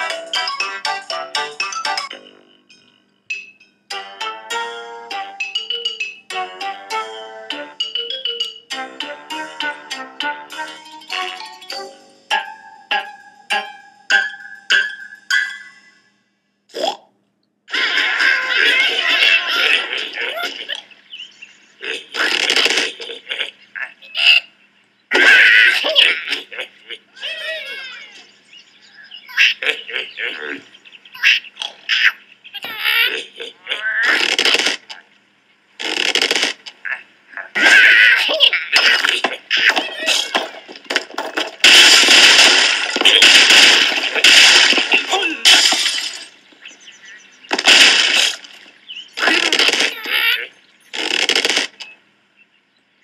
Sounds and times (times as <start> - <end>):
Vibraphone: 0.0 - 16.0.